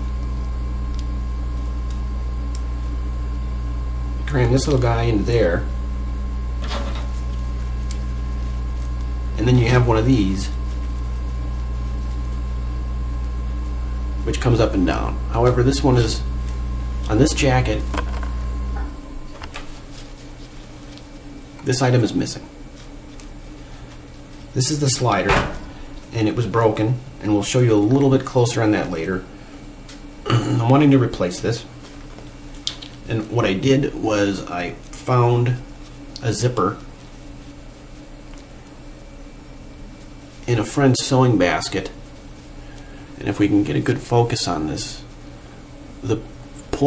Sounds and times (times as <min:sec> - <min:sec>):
Speech: 0:04.2 - 0:05.7, 0:09.4 - 0:10.6, 0:14.2 - 0:16.3, 0:17.1 - 0:18.0, 0:21.6 - 0:22.5, 0:24.6 - 0:29.3, 0:30.4 - 0:31.7, 0:33.1 - 0:36.9, 0:40.5 - 0:42.0, 0:43.2 - 0:45.1, 0:46.0 - 0:46.8.